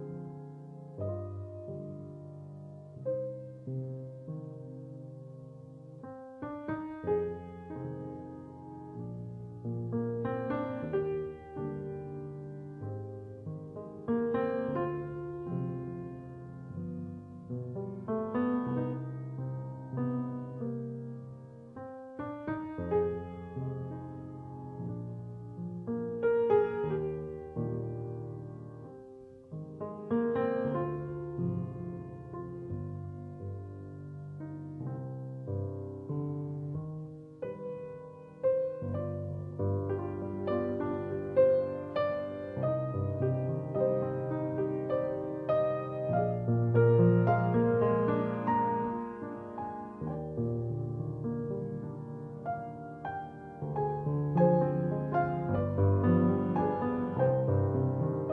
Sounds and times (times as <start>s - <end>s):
Music: 0.0s - 58.3s.